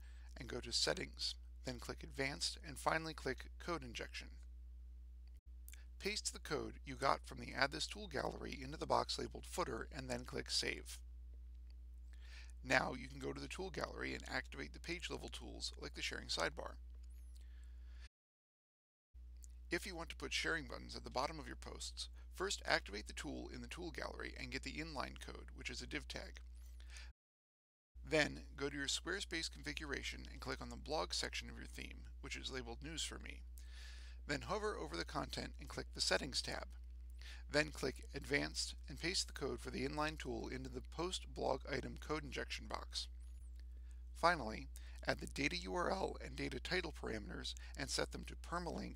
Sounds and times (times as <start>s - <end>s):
Speech: 0.4s - 4.4s, 6.0s - 11.0s, 12.6s - 16.8s, 19.7s - 26.4s, 28.1s - 33.4s, 34.3s - 36.8s, 37.4s - 43.1s, 44.2s - 48.9s.